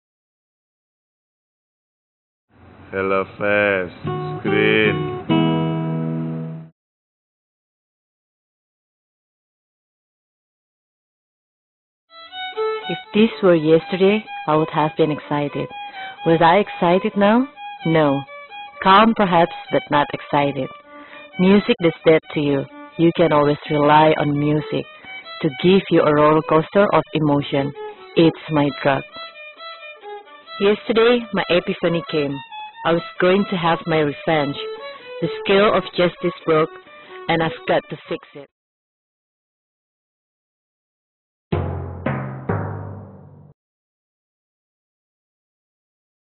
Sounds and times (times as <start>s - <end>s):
Speech: 2.9s - 5.0s, 12.9s - 20.7s, 21.4s - 29.0s, 30.6s - 38.5s
Violin, fiddle: 12.2s - 38.4s.